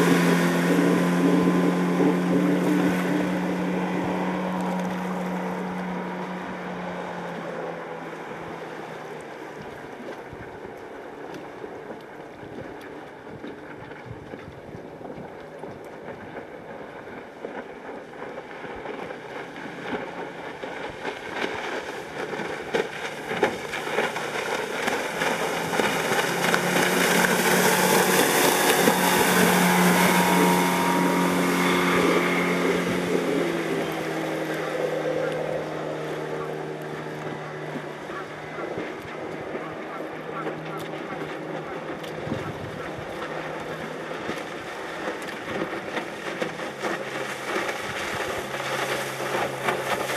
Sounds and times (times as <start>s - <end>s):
Motorboat, speedboat: 0.0s - 50.1s.